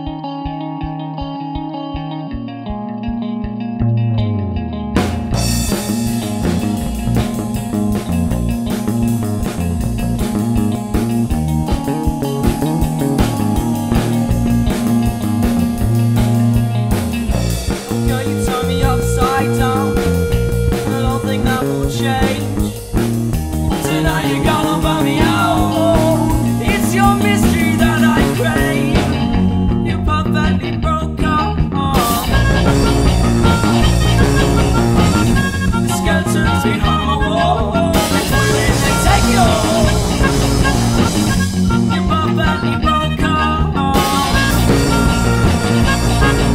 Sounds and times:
Music: 0.0 - 46.5.

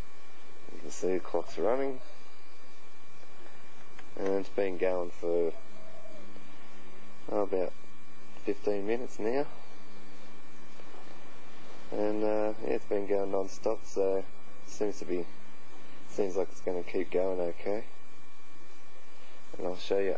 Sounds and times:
Speech: 0.7 - 2.2, 4.2 - 5.6, 7.3 - 7.8, 8.4 - 9.6, 11.9 - 15.4, 16.1 - 17.9, 19.5 - 20.1.

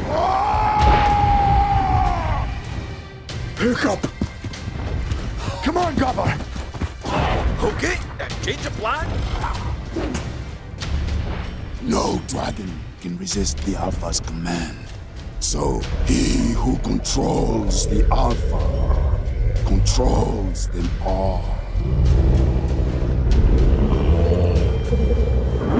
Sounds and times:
Music: 0.0 - 25.8
Speech: 11.8 - 18.8, 19.7 - 21.6.

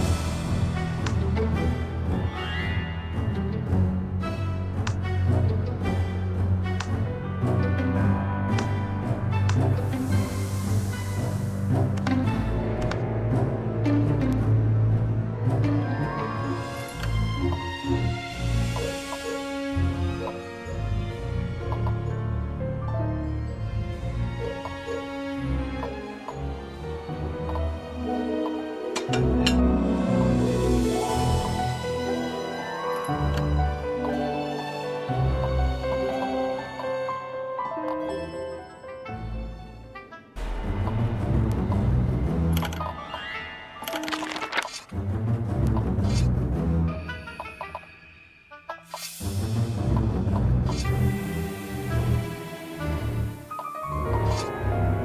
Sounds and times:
Music: 0.0 - 55.0.

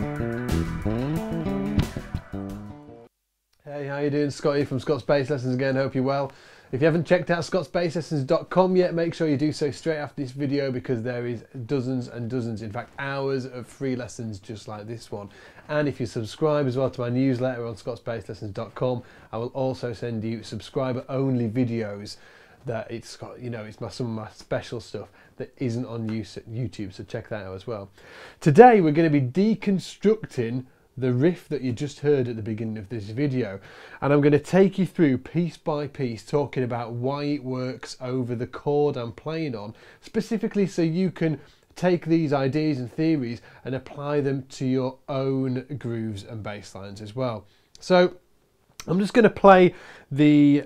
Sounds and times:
Speech: 3.6 - 48.2, 48.8 - 50.6.

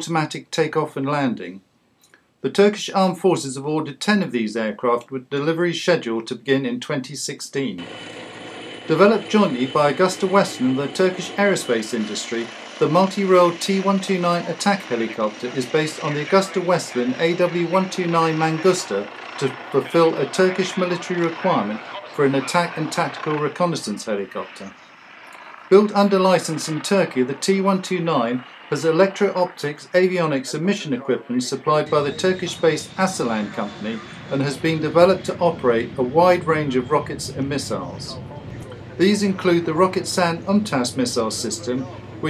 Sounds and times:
Speech: 0.0 - 1.6, 2.4 - 7.9, 8.9 - 24.8, 25.7 - 42.2
Helicopter: 7.8 - 42.2.

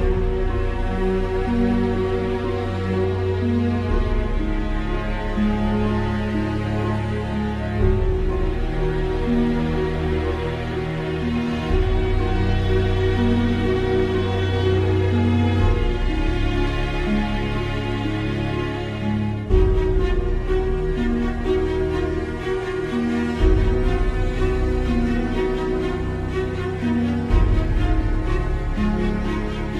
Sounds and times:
Music: 0.0 - 29.7.

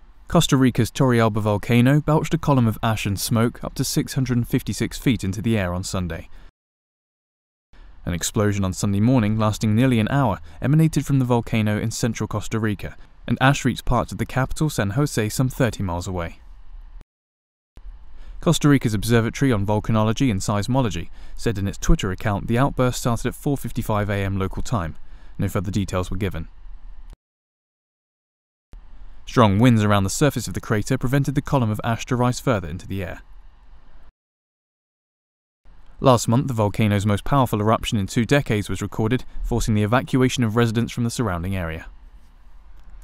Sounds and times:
Speech: 0.3 - 6.3, 8.1 - 16.4, 18.4 - 26.5, 29.3 - 33.2, 36.0 - 42.0.

